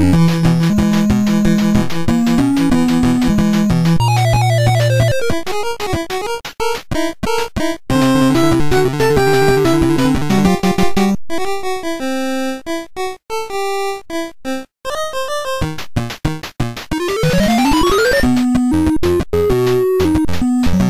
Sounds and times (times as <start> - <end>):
Video game music: 0.0 - 20.9.